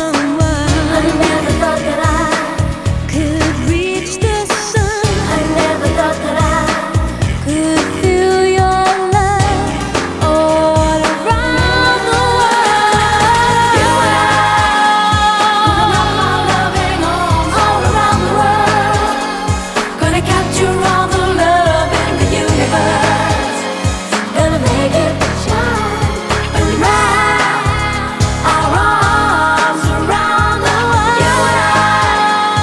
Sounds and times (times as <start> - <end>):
Music of Asia: 0.0 - 32.6
Pop music: 0.0 - 32.6.